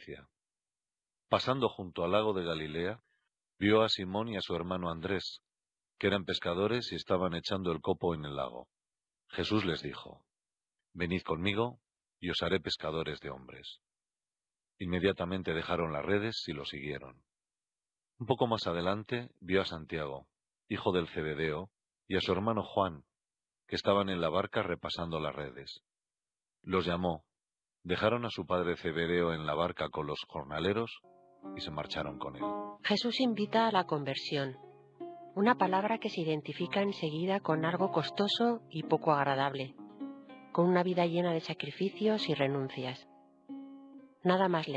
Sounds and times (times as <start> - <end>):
Speech: 0.0 - 0.3, 1.3 - 3.0, 3.6 - 5.4, 6.0 - 8.7, 9.3 - 10.2, 11.0 - 13.8, 14.8 - 17.2, 18.2 - 23.0, 23.7 - 25.8, 26.7 - 27.3, 27.9 - 31.0, 31.6 - 34.6, 35.4 - 39.7, 40.6 - 43.0, 44.3 - 44.7.